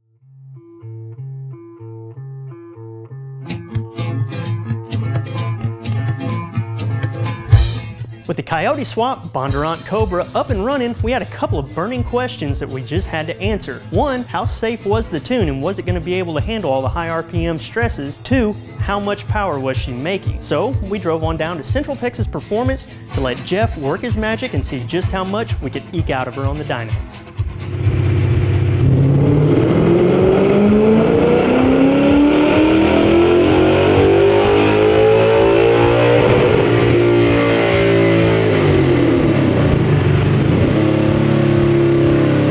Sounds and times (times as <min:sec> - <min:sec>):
Medium engine (mid frequency): 0:27.4 - 0:42.5
Car: 0:27.6 - 0:42.5
Accelerating, revving, vroom: 0:28.2 - 0:42.5.